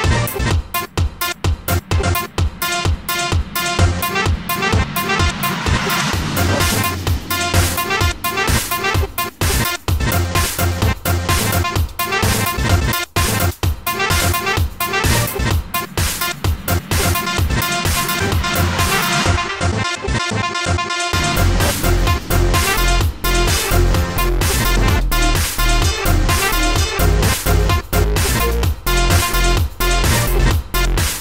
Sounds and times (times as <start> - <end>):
Dubstep: 0.0 - 31.2.